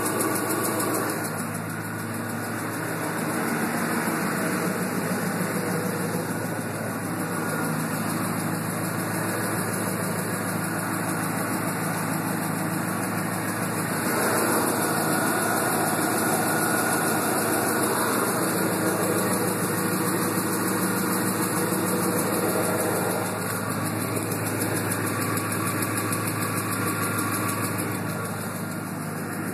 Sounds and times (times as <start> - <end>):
Car: 0.0 - 29.5
Medium engine (mid frequency): 0.0 - 29.5.